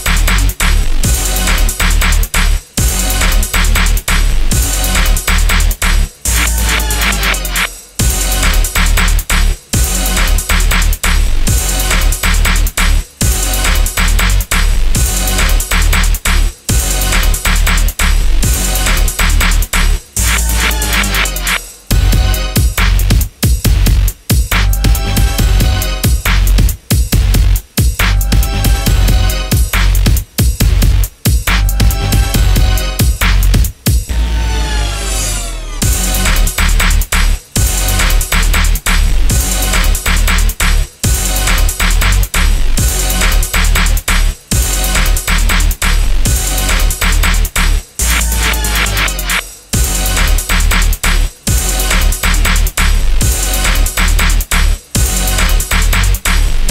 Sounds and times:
Music: 0:00.0 - 0:56.7.

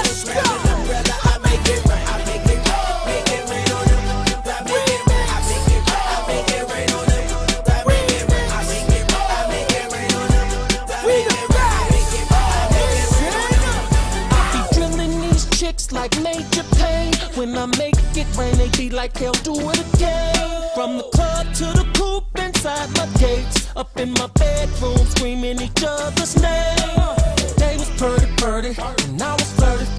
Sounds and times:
Music: 0:00.0 - 0:29.9.

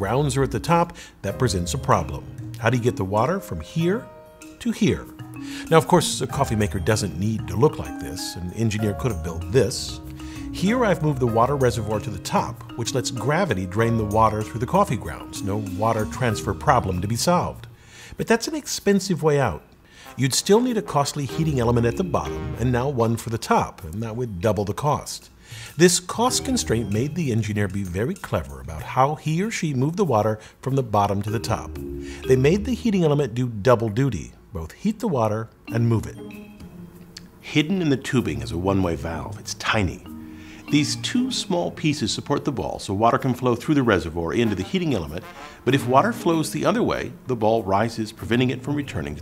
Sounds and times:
Speech: 0:00.0 - 0:19.6, 0:20.2 - 0:36.2, 0:37.4 - 0:40.1, 0:40.7 - 0:49.2
Music: 0:00.0 - 0:49.2.

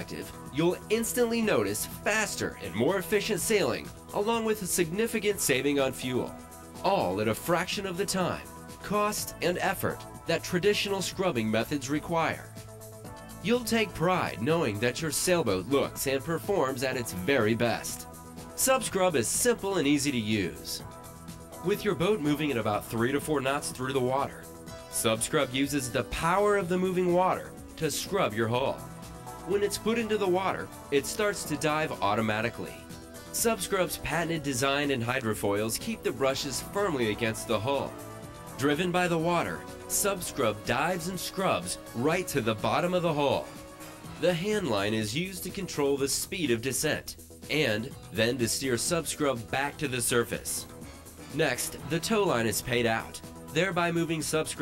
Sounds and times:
Speech: 0:00.0 - 0:12.5, 0:13.4 - 0:18.0, 0:18.6 - 0:20.8, 0:21.6 - 0:24.4, 0:25.0 - 0:28.8, 0:29.4 - 0:37.9, 0:38.6 - 0:43.5, 0:44.2 - 0:50.7, 0:51.3 - 0:54.6
Music: 0:00.0 - 0:54.6.

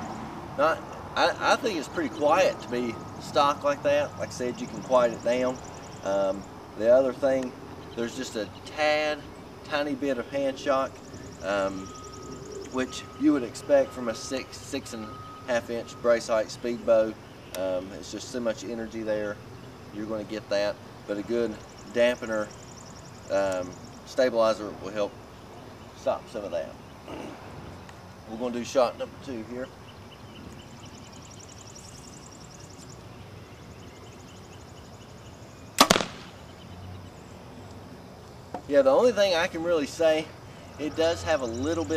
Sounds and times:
Speech: 0:00.6 - 0:11.9, 0:12.8 - 0:19.4, 0:23.3 - 0:25.1, 0:26.0 - 0:26.8, 0:28.3 - 0:29.7, 0:38.7 - 0:41.9.

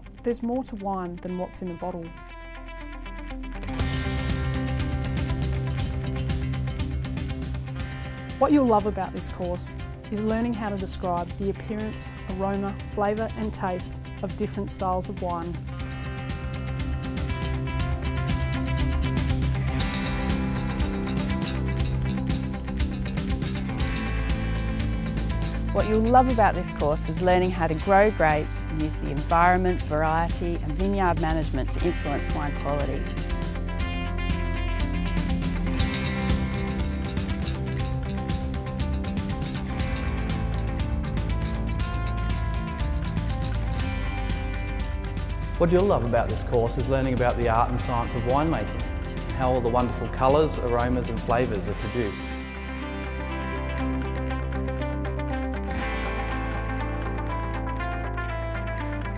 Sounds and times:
Music: 0:00.0 - 0:59.1
Speech: 0:00.3 - 0:02.1, 0:08.4 - 0:15.6, 0:25.8 - 0:33.0, 0:45.6 - 0:48.7, 0:49.4 - 0:52.3.

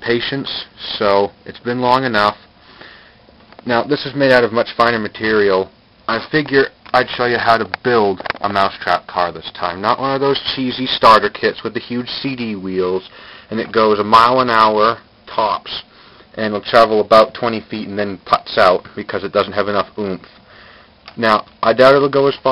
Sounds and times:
Speech: 0:00.0 - 0:02.4, 0:03.6 - 0:20.4, 0:21.1 - 0:22.5.

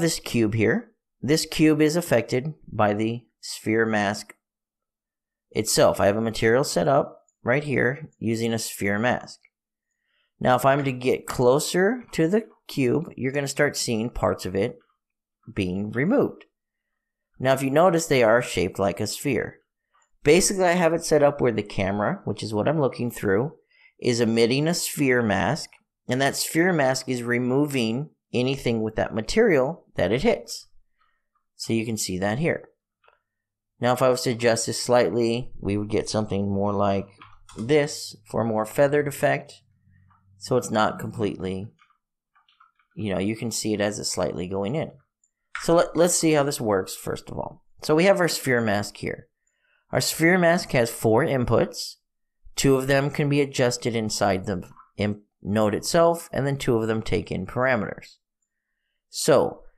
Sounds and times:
Speech: 0:00.0 - 0:04.4, 0:05.5 - 0:09.5, 0:10.4 - 0:14.8, 0:15.5 - 0:16.5, 0:17.4 - 0:19.6, 0:20.2 - 0:30.7, 0:31.6 - 0:32.8, 0:33.8 - 0:39.6, 0:40.4 - 0:41.8, 0:43.0 - 0:45.0, 0:45.6 - 0:49.3, 0:49.9 - 0:58.2, 0:59.1 - 0:59.7.

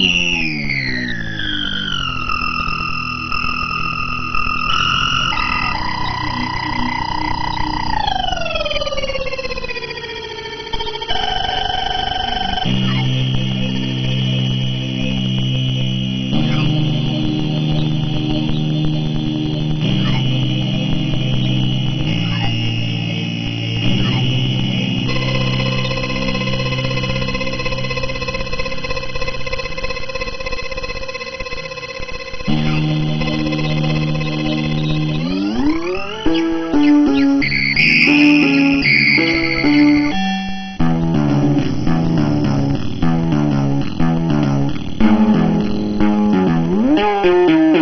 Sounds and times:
Sampler: 0:00.0 - 0:47.8.

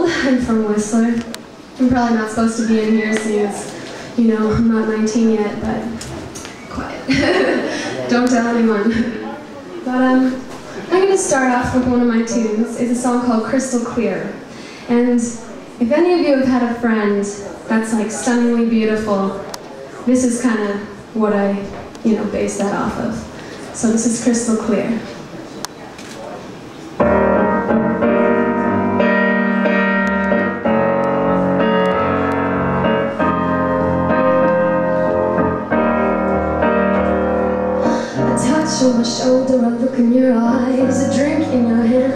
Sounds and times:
Speech: 0:00.0 - 0:26.6, 0:38.2 - 0:42.1.

